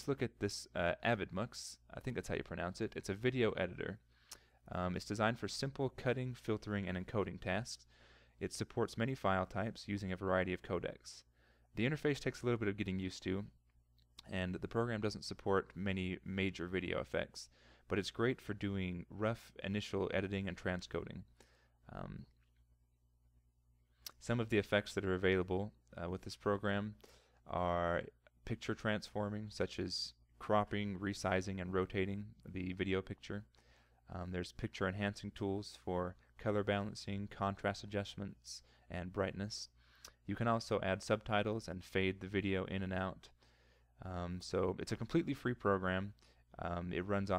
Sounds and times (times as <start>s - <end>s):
Speech: 0.0s - 4.1s, 4.7s - 13.6s, 14.2s - 22.4s, 24.1s - 43.4s, 44.0s - 47.3s.